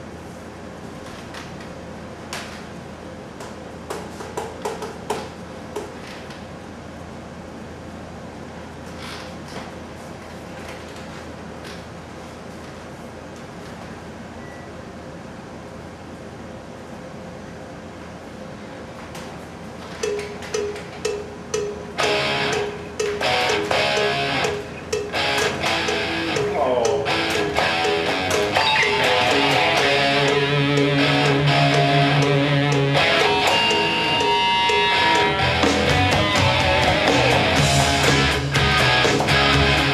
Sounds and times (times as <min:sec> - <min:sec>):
Music: 0:22.0 - 0:39.9.